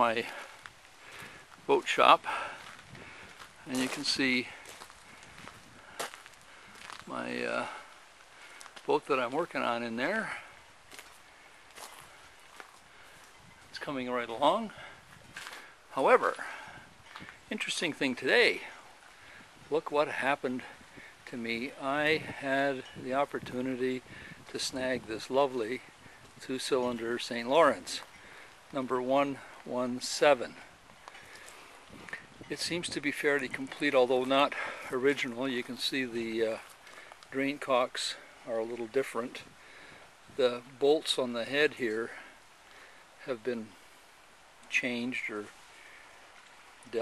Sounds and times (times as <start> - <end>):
Speech: 0.0 - 0.5, 1.7 - 2.5, 3.7 - 4.6, 7.1 - 7.8, 8.9 - 10.4, 13.8 - 14.8, 15.9 - 16.5, 17.5 - 18.8, 19.7 - 20.7, 21.3 - 28.1, 28.7 - 30.7, 32.5 - 36.7, 37.3 - 39.4, 40.4 - 42.3, 43.2 - 43.8, 44.7 - 45.5.